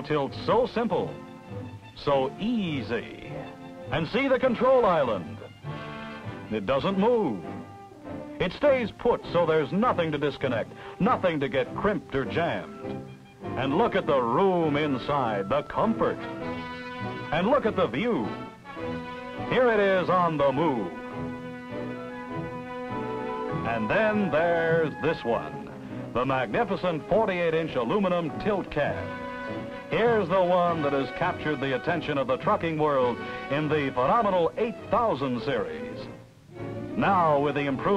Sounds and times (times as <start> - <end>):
Speech: 0.0 - 1.2, 2.0 - 5.4, 6.5 - 7.5, 8.4 - 12.8, 13.6 - 16.3, 17.3 - 18.4, 19.5 - 21.0, 23.6 - 25.6, 26.2 - 29.1, 29.9 - 36.1, 37.0 - 37.9
Music: 0.0 - 37.9.